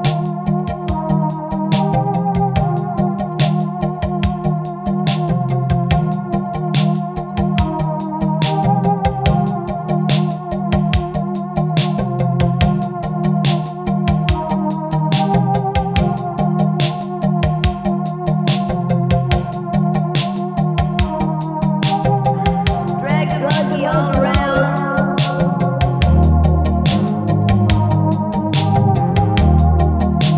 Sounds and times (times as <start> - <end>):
House music: 19.2 - 30.3.